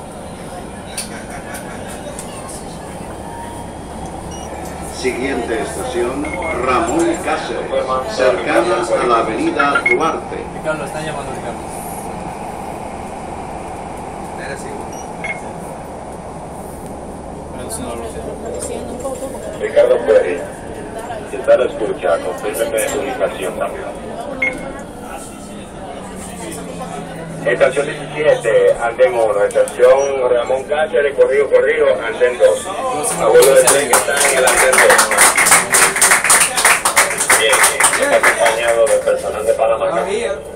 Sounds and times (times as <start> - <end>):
Subway, metro, underground: 0.0 - 40.5.